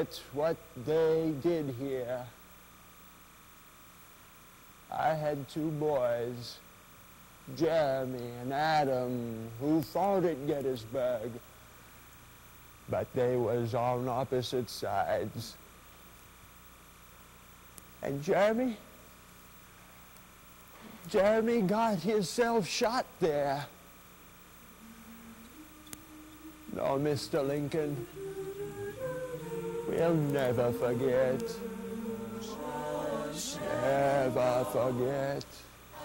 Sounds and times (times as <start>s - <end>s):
Speech: 0.0s - 2.4s, 4.9s - 6.6s, 7.5s - 11.4s, 12.9s - 15.6s, 18.0s - 18.9s, 21.1s - 23.8s, 26.7s - 28.0s.